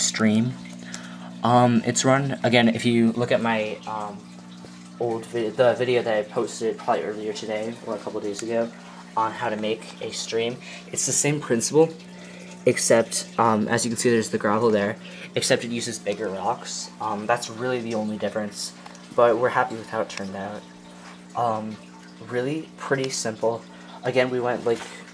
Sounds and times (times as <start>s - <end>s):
Speech: 0.0s - 0.6s, 1.4s - 4.2s, 5.0s - 12.0s, 12.6s - 20.7s, 21.4s - 25.1s.